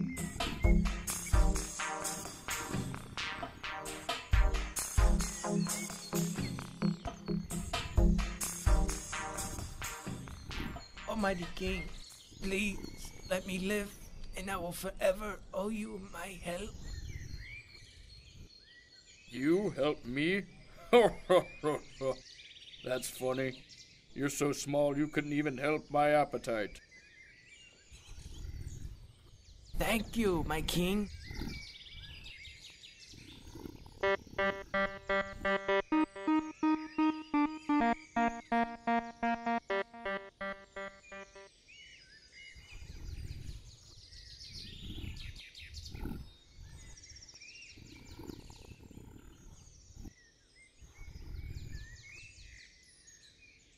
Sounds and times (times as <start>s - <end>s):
Speech: 11.1s - 16.8s, 29.8s - 31.1s.